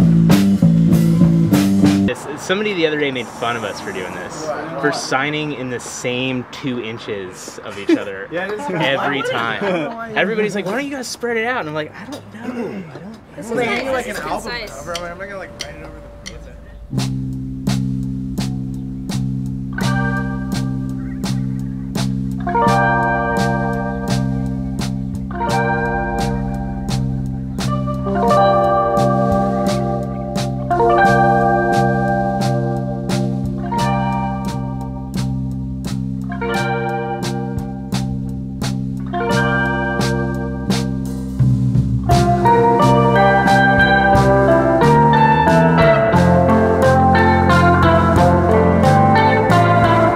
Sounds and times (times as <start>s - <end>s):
Music: 0.0s - 2.2s, 13.6s - 50.1s.